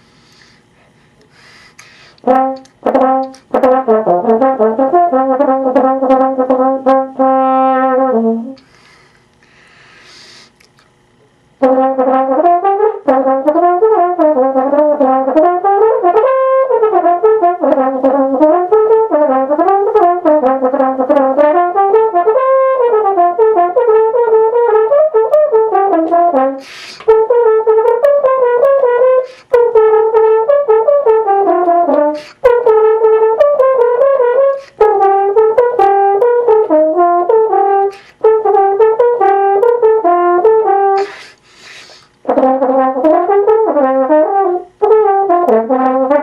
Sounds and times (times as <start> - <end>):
French horn: 2.2 - 8.7, 11.6 - 46.2.